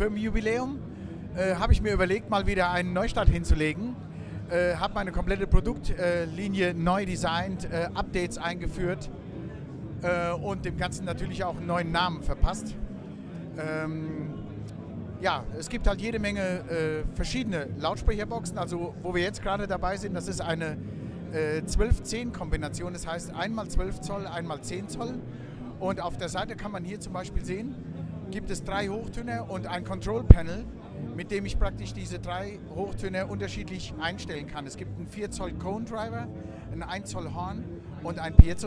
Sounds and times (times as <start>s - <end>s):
Speech: 0.0s - 9.2s, 10.0s - 12.9s, 13.5s - 14.5s, 15.2s - 38.6s
Music: 0.0s - 38.6s.